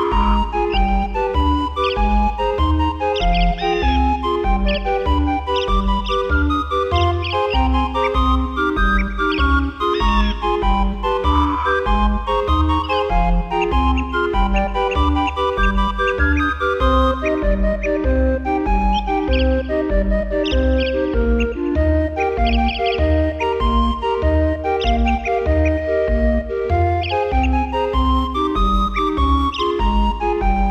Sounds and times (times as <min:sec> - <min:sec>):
Music: 0:00.0 - 0:30.7.